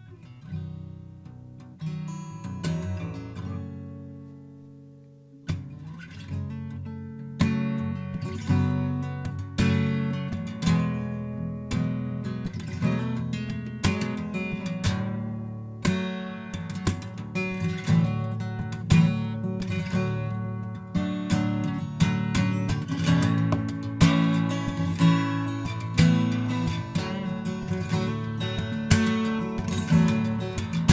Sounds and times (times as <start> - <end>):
Acoustic guitar: 0.0 - 30.9.